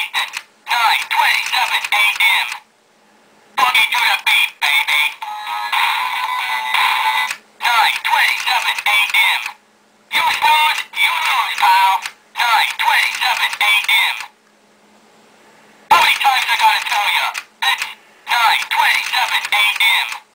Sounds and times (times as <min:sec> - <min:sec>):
Speech: 0:00.0 - 0:02.6, 0:03.6 - 0:14.4, 0:15.9 - 0:20.3.